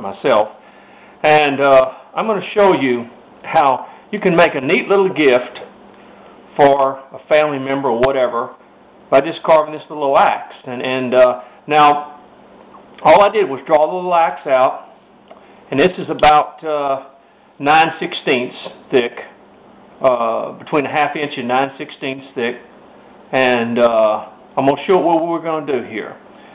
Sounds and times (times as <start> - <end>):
Speech: 0.0 - 0.6, 1.2 - 5.7, 6.6 - 12.2, 13.0 - 15.0, 15.7 - 19.4, 20.0 - 22.7, 23.3 - 26.2.